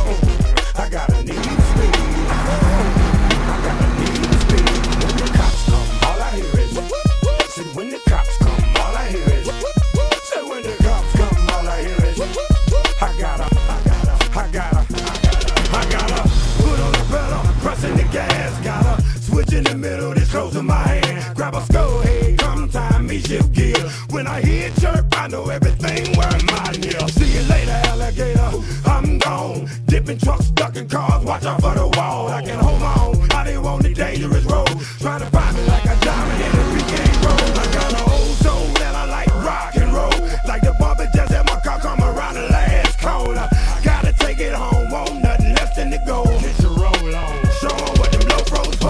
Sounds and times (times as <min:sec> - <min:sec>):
Music: 0:00.0 - 0:48.8.